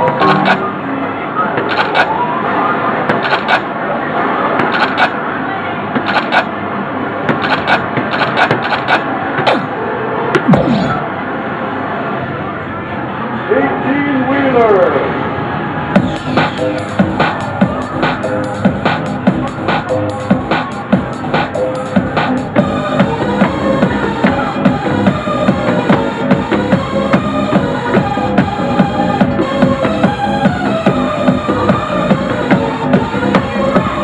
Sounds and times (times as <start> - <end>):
Music: 0.0 - 0.7, 16.0 - 34.0.